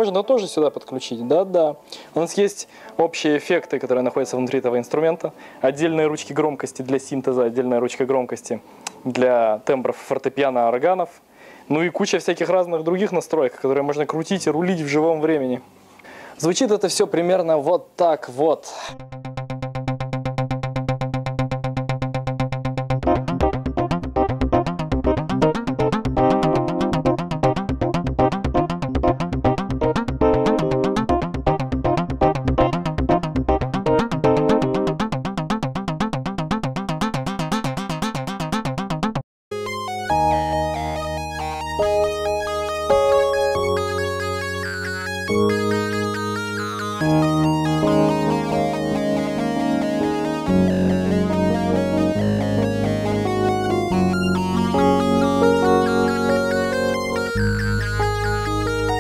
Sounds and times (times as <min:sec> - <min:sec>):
Synthesizer: 0:00.0 - 0:08.2, 0:23.0 - 0:59.0
Electric piano: 0:19.0 - 0:59.0.